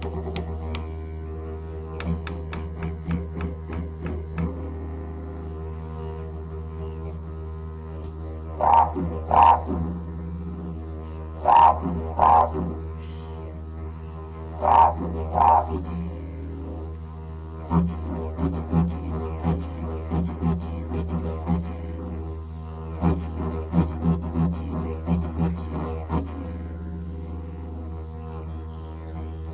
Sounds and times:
Didgeridoo: 0.0 - 29.5.

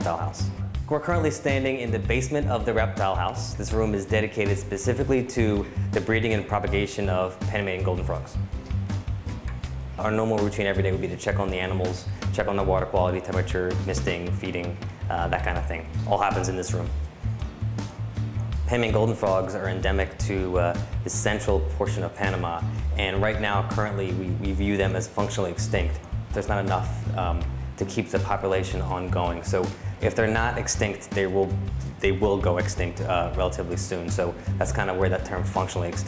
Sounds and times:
Speech: 0.0 - 8.4, 10.0 - 16.9, 18.7 - 36.0
Music: 0.0 - 36.0.

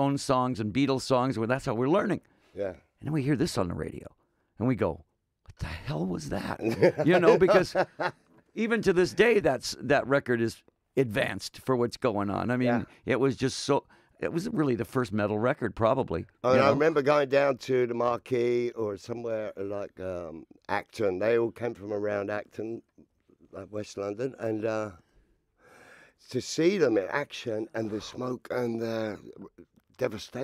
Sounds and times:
Speech: 5.6 - 7.8, 8.6 - 22.9, 23.6 - 25.0, 26.3 - 30.4.

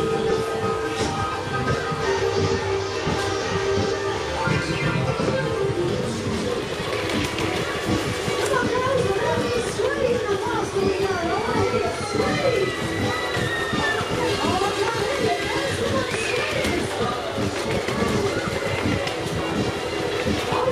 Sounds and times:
Speech: 8.4 - 12.8, 13.7 - 19.6.

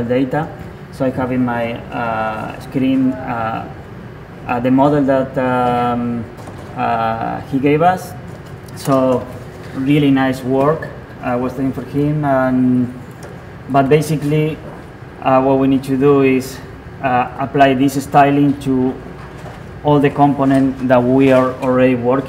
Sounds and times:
Speech: 0.0 - 3.8, 4.4 - 8.2, 8.8 - 13.0, 13.7 - 19.0, 19.8 - 22.2.

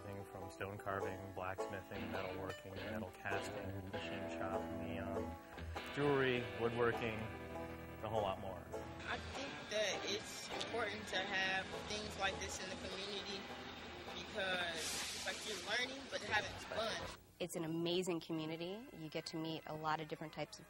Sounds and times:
Speech: 0.0 - 5.2, 6.0 - 7.3, 14.2 - 20.6
Music: 0.0 - 20.6.

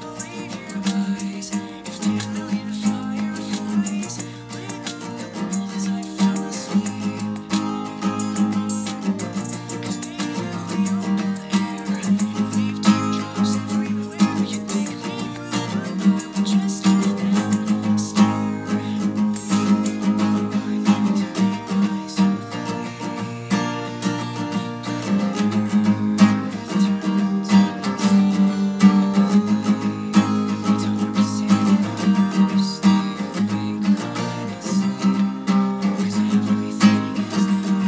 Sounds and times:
Music: 0.0 - 37.8.

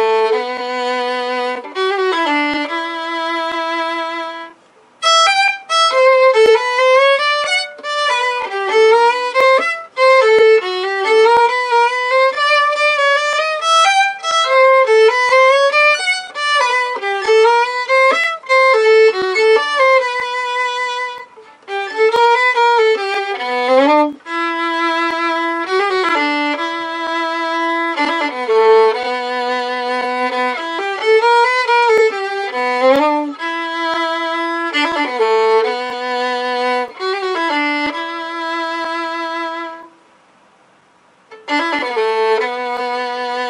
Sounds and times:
Violin, fiddle: 0.0 - 40.0, 41.3 - 43.5.

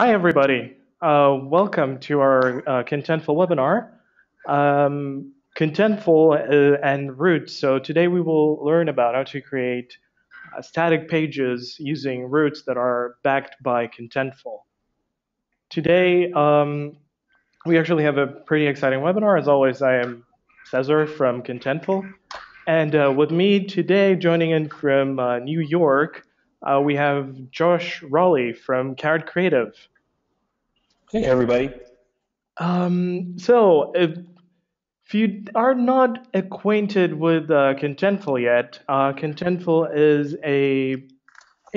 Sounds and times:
Speech: 0.0 - 3.9, 4.5 - 14.6, 15.7 - 17.0, 17.7 - 29.8, 31.2 - 31.8, 32.6 - 34.2, 35.1 - 41.0.

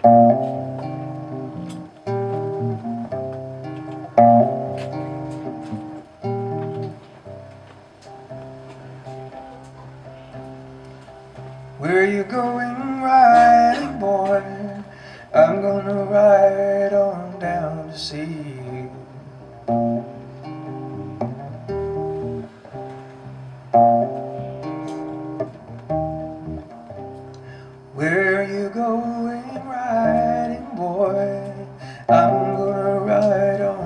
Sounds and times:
Guitar: 0.0 - 33.8
Singing: 11.8 - 19.2, 28.0 - 33.8.

